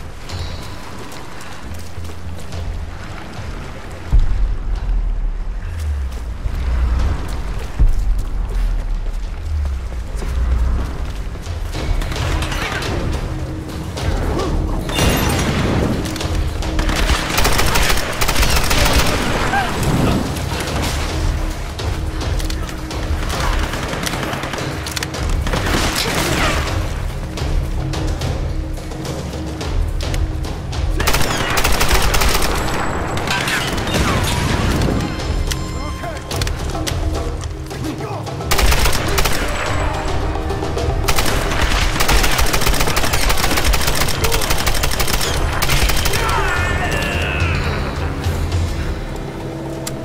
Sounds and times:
Music: 0.0 - 50.0
Outside, rural or natural: 0.0 - 50.0.

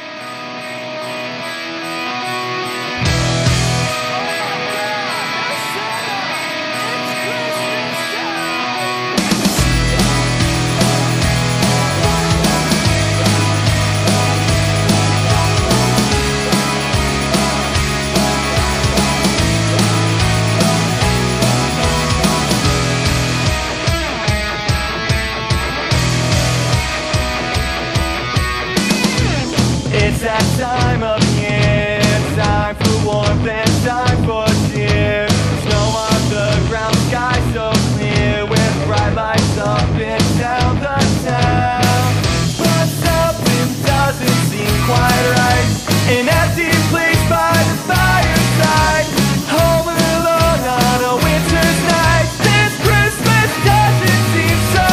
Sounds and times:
Progressive rock: 0.0 - 54.9.

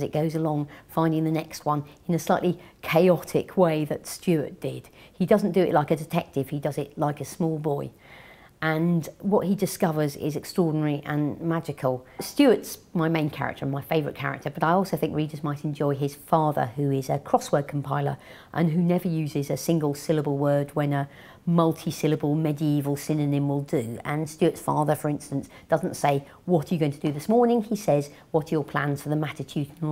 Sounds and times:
Speech: 0.0 - 8.0, 8.6 - 29.9.

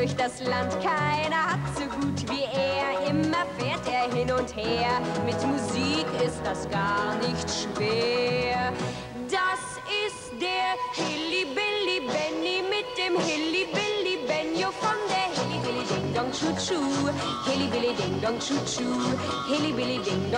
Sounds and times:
Music: 0.0 - 20.3.

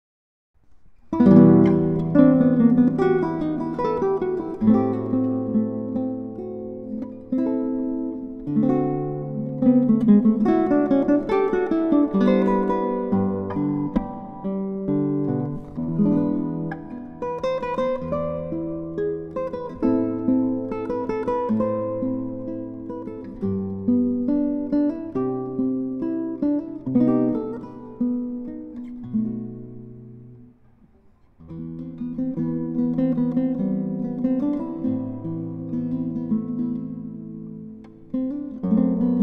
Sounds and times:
Acoustic guitar: 0.6 - 39.2.

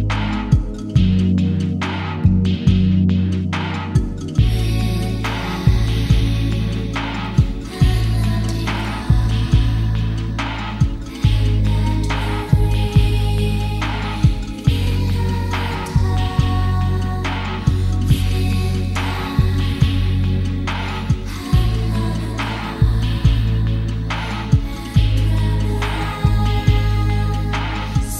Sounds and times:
Music: 0.0 - 28.1.

